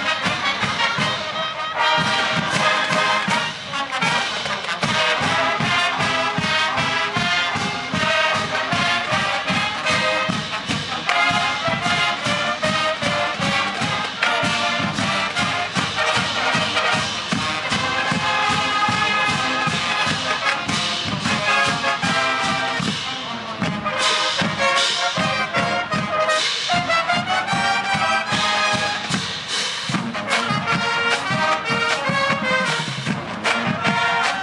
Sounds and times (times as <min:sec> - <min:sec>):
Music: 0:00.0 - 0:34.4
Outside, urban or manmade: 0:00.0 - 0:34.4.